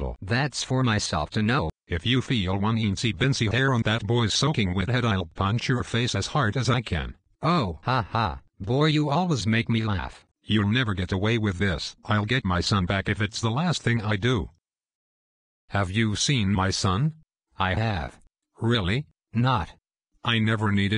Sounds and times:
Speech: 0.0 - 14.6, 15.7 - 20.9.

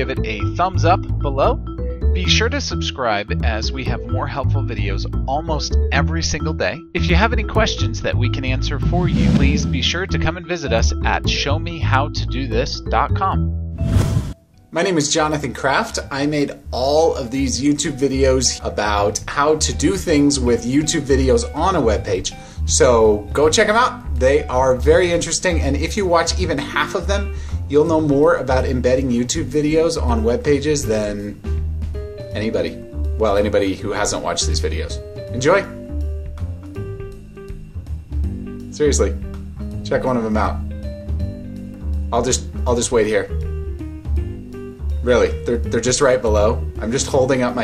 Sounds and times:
Speech: 0.0 - 1.6, 2.2 - 13.4, 14.8 - 31.4, 32.3 - 35.8, 38.7 - 39.2, 39.8 - 40.6, 42.1 - 43.3, 45.0 - 47.6
Music: 0.0 - 47.6.

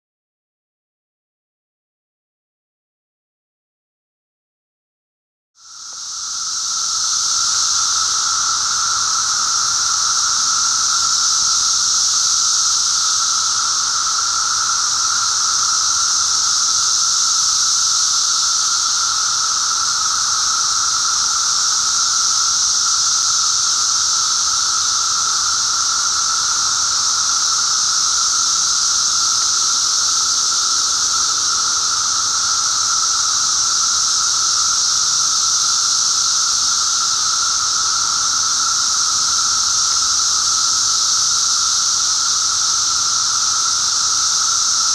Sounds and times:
Outside, rural or natural: 5.6 - 44.9.

